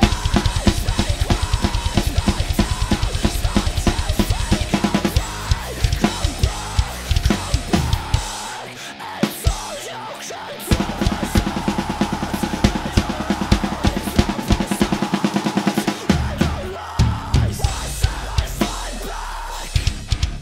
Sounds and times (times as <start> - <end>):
Drum kit: 0.0 - 10.0, 10.6 - 20.4.